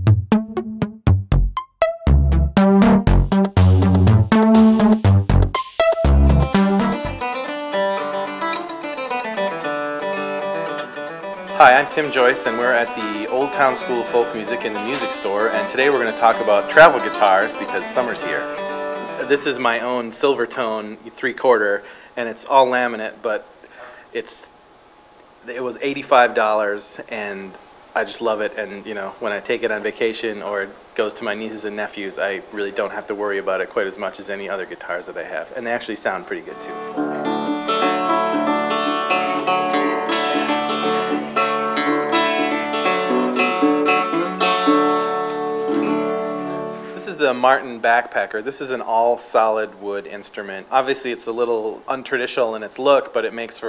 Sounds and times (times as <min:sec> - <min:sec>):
Music: 0:00.0 - 0:19.9, 0:36.3 - 0:47.8
Speech: 0:11.6 - 0:23.4, 0:24.1 - 0:24.5, 0:25.4 - 0:36.8, 0:47.0 - 0:53.6.